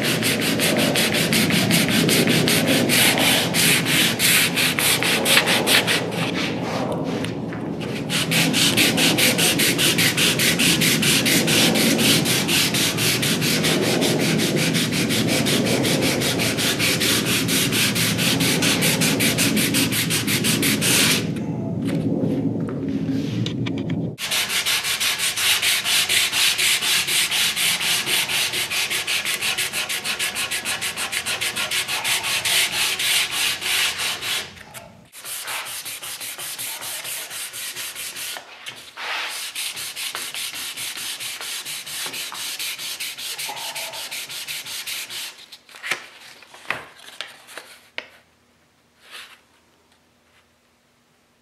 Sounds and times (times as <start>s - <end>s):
Sanding: 0.0s - 7.2s, 7.9s - 21.3s, 24.2s - 34.6s, 35.2s - 45.4s
Rub: 24.2s - 45.6s.